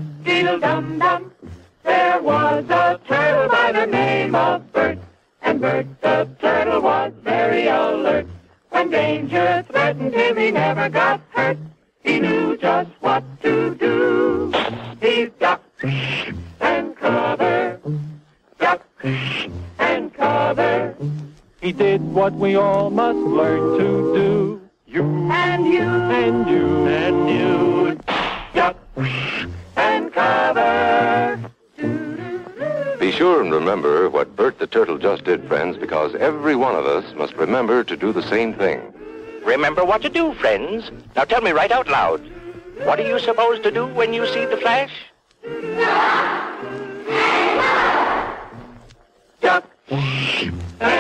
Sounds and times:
Music: 0:00.0 - 0:51.0.

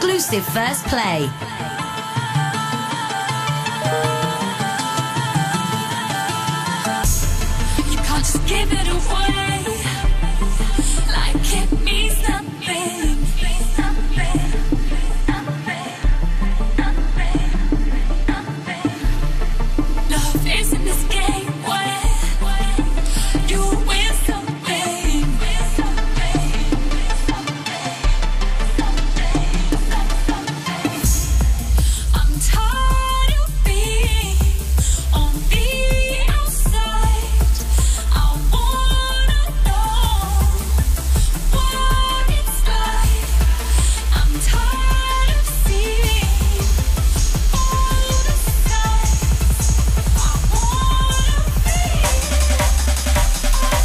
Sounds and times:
Music: 0:00.0 - 0:53.8.

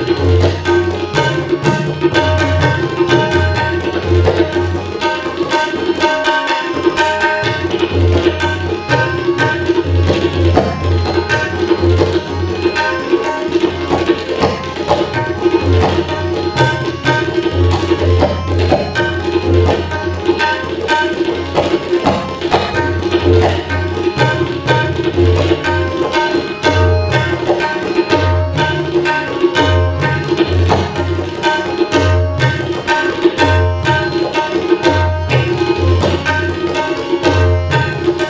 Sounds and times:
Music of Asia: 0:00.0 - 0:38.2
Tabla: 0:00.0 - 0:38.2.

